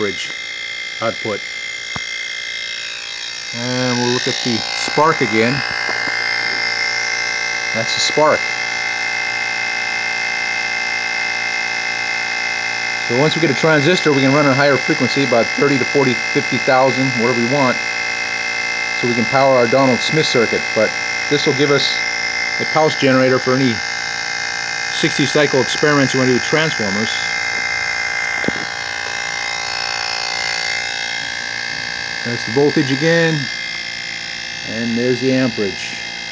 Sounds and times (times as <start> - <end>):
Speech: 0.0 - 0.3, 1.0 - 1.4, 3.6 - 5.6, 7.8 - 8.4, 13.1 - 17.8, 19.0 - 22.0, 22.6 - 23.8, 25.0 - 27.3, 32.3 - 33.5, 34.7 - 36.0.